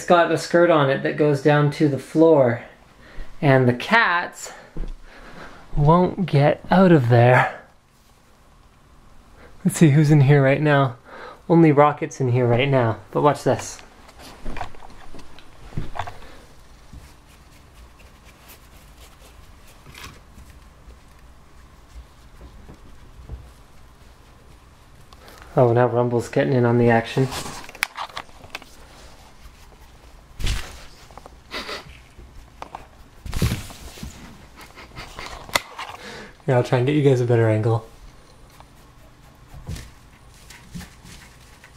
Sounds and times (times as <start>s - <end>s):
Speech: 0.0s - 2.8s, 3.4s - 4.7s, 5.8s - 7.7s, 9.6s - 13.9s, 25.6s - 27.5s, 36.4s - 38.0s.